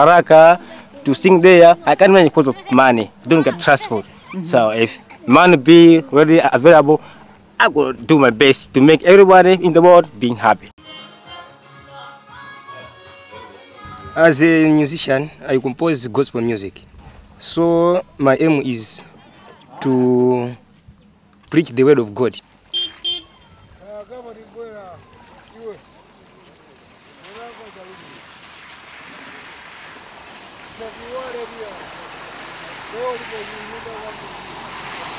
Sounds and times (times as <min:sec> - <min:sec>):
Music: 0:10.8 - 0:14.5.